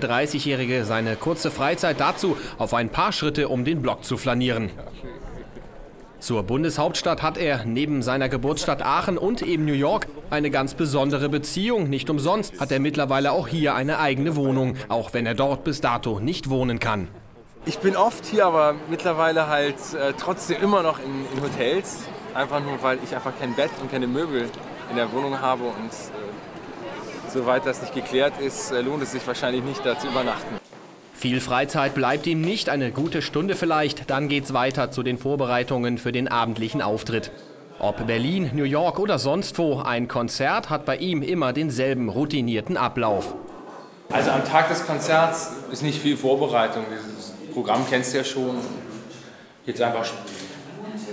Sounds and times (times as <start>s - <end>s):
Hubbub, speech noise, speech babble: 0.0s - 51.1s
Speech: 6.2s - 26.4s, 31.2s - 43.4s.